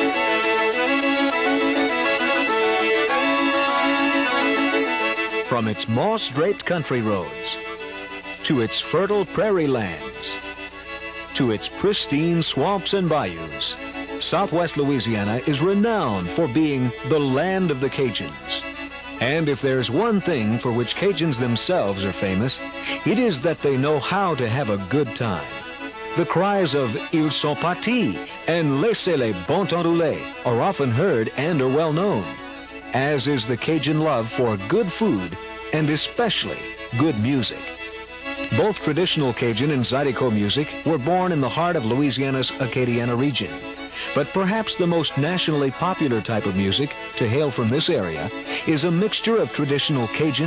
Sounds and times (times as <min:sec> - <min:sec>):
Music: 0:00.0 - 0:50.4
Speech: 0:05.5 - 0:07.6, 0:08.4 - 0:10.4, 0:11.4 - 0:18.6, 0:19.2 - 0:25.6, 0:26.2 - 0:37.6, 0:38.5 - 0:50.4.